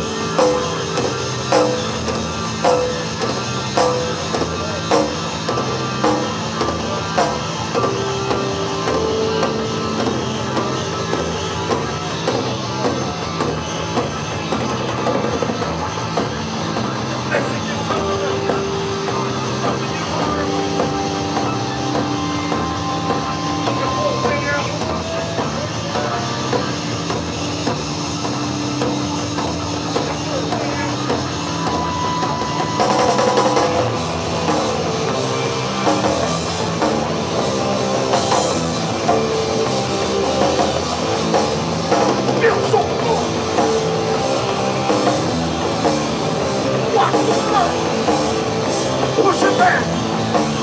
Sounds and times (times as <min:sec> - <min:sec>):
Music: 0:00.0 - 0:50.6.